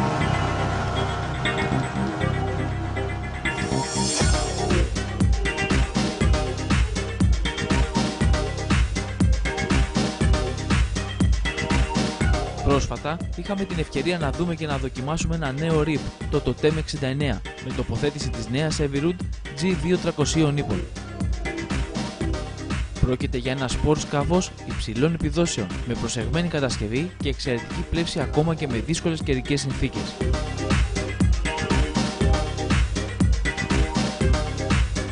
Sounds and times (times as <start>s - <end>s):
Music: 0.0s - 35.1s
Speech: 12.7s - 20.9s, 23.0s - 30.2s.